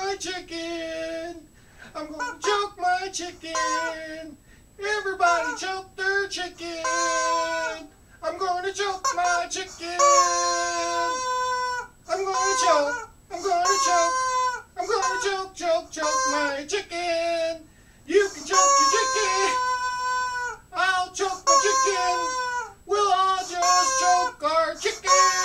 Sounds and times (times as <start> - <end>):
Speech: 0.0 - 1.4, 2.0 - 11.2, 12.1 - 14.2, 14.8 - 19.7, 20.8 - 25.4.